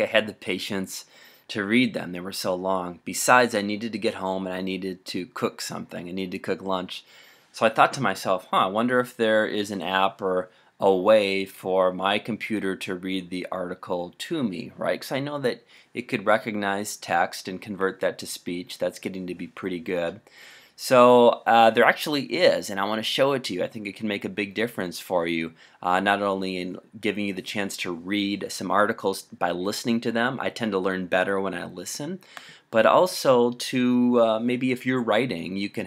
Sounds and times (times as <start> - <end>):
Speech: 0.0 - 35.8.